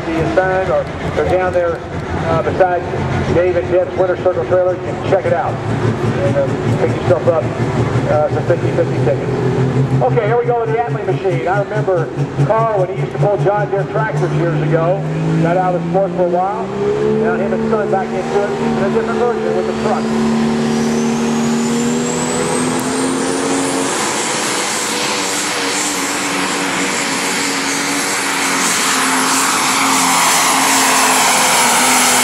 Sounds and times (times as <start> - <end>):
Truck: 0.0 - 32.2.